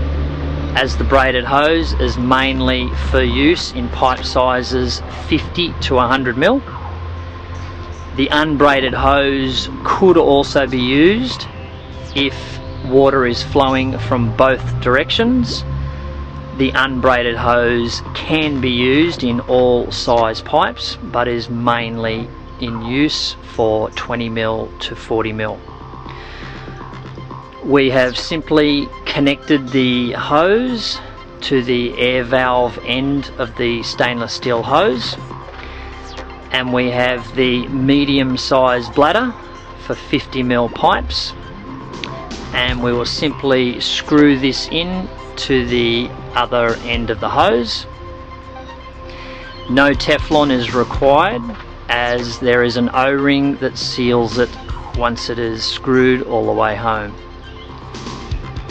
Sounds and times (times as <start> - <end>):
Music: 0.0 - 58.7
Speech: 0.8 - 6.7, 8.2 - 11.5, 12.2 - 15.6, 16.6 - 25.6, 27.6 - 35.2, 36.5 - 41.4, 42.5 - 47.9, 49.7 - 57.2.